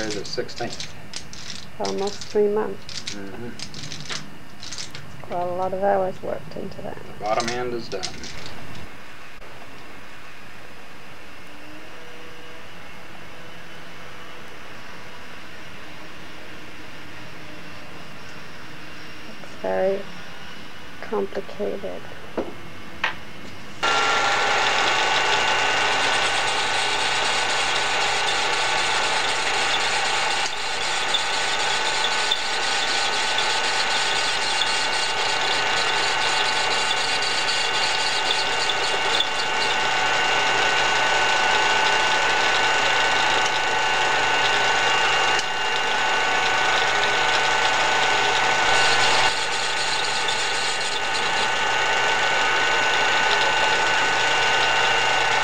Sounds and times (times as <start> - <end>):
Engine: 23.8 - 55.4.